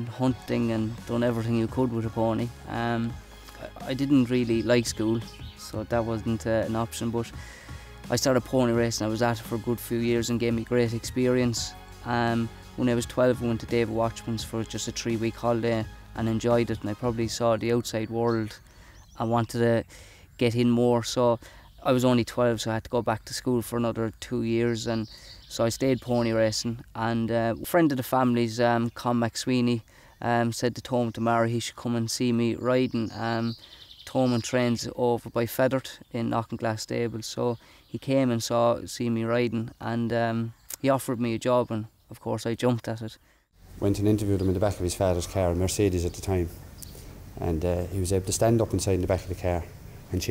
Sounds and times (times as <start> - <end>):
Speech: 0.0 - 7.4, 8.1 - 18.6, 19.2 - 43.2, 43.8 - 46.5, 47.4 - 50.3
Music: 0.0 - 18.6.